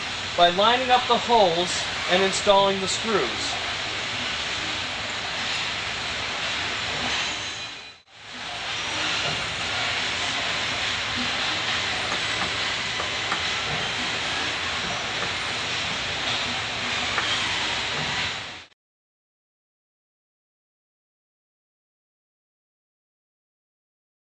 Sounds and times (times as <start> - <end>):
Speech: 0.4 - 3.6.